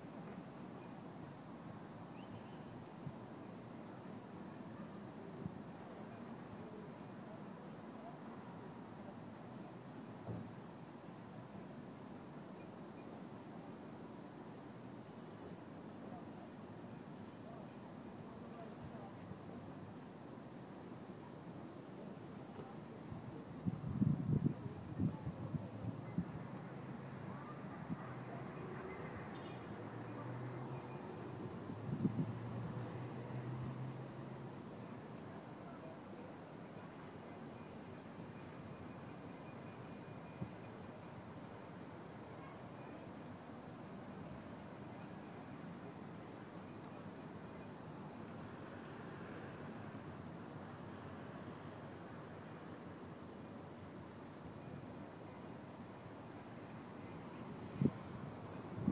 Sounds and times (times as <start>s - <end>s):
Speech: 3.9s - 9.9s, 16.0s - 16.7s, 17.3s - 20.0s, 21.9s - 23.8s, 24.5s - 31.0s, 35.0s - 37.9s, 42.2s - 43.3s.